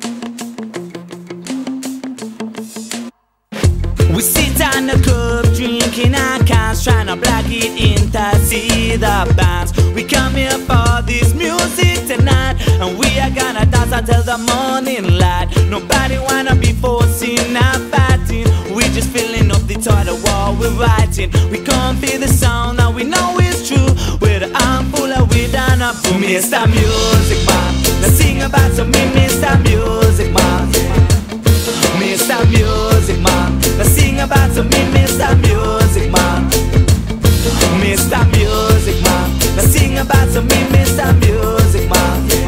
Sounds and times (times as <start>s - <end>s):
Blues: 0.0s - 42.4s
Happy music: 0.0s - 42.4s
Rhythm and blues: 0.0s - 42.4s
Exciting music: 25.3s - 42.4s.